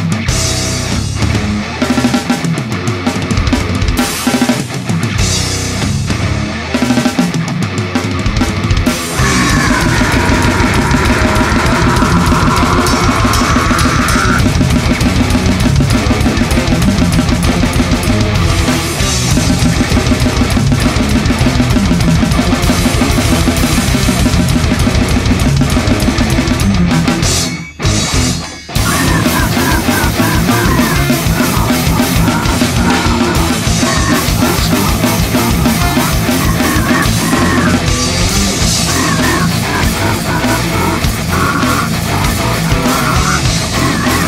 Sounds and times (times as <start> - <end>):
Drum: 0.0 - 44.2
Drum kit: 0.0 - 44.2.